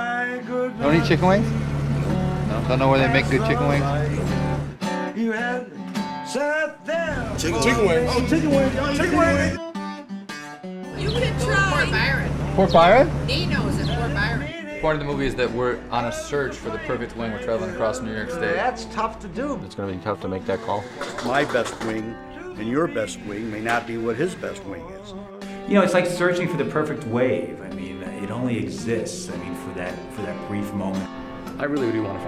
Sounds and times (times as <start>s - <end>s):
Music: 0.0s - 32.2s
Speech: 2.5s - 4.0s, 7.4s - 9.6s, 11.0s - 24.8s, 25.7s - 32.2s.